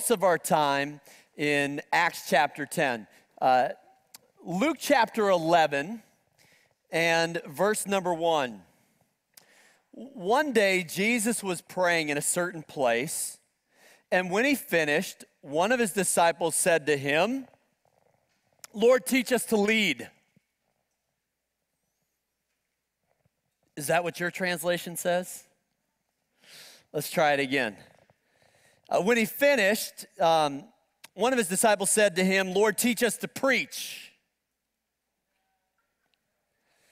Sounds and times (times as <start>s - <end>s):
Speech: 0.0s - 3.8s, 4.4s - 6.1s, 6.9s - 8.6s, 10.0s - 13.4s, 14.1s - 17.5s, 18.7s - 20.2s, 23.8s - 25.5s, 26.9s - 27.9s, 28.9s - 34.2s.